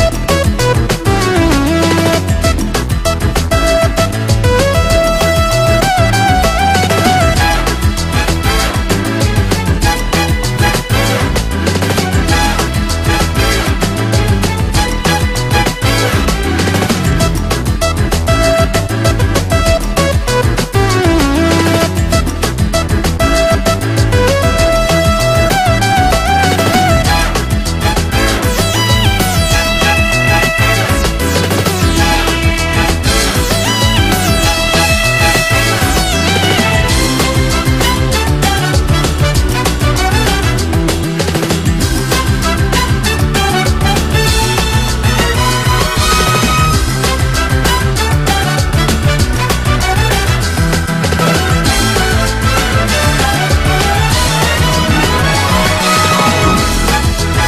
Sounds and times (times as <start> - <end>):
Music: 0.0 - 57.4.